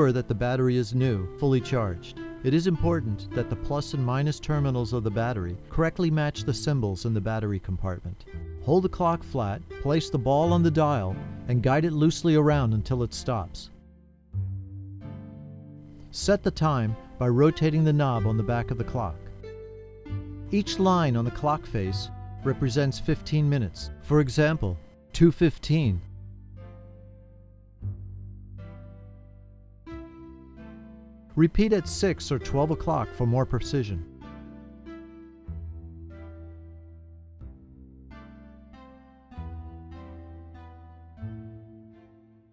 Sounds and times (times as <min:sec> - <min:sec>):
Speech: 0:00.0 - 0:13.7, 0:16.1 - 0:19.3, 0:20.5 - 0:26.1, 0:31.4 - 0:34.1
Music: 0:00.0 - 0:42.5.